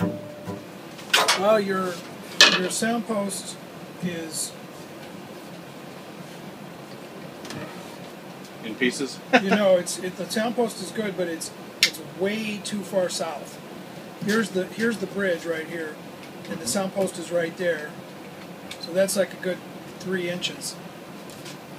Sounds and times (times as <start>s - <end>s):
Speech: 1.2s - 4.6s, 8.6s - 13.6s, 14.2s - 18.0s, 18.8s - 20.8s.